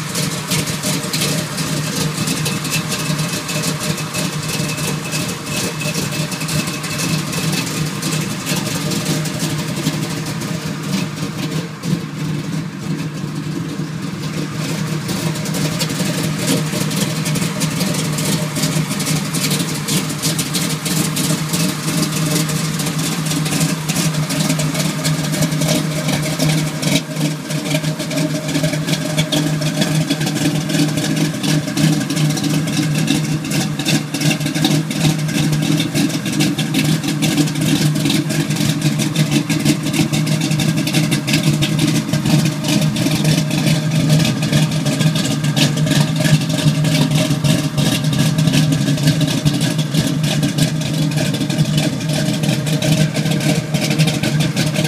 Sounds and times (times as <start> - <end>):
Heavy engine (low frequency): 0.0 - 54.8.